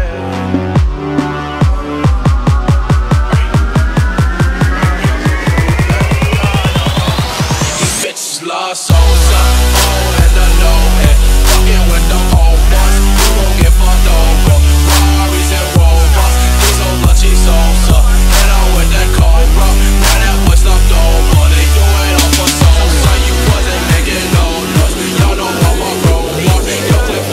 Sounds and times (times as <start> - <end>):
Music: 0.0 - 27.3.